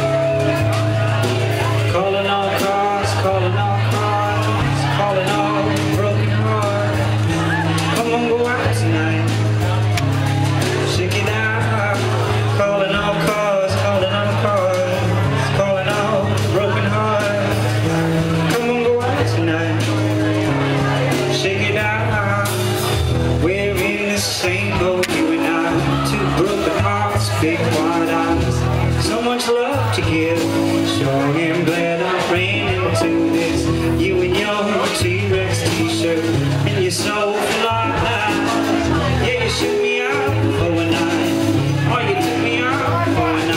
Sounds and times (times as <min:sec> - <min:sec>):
Crowd: 0:00.0 - 0:43.5
Music: 0:00.0 - 0:43.5
Singing: 0:00.0 - 0:43.5
Speech: 0:00.0 - 0:43.5.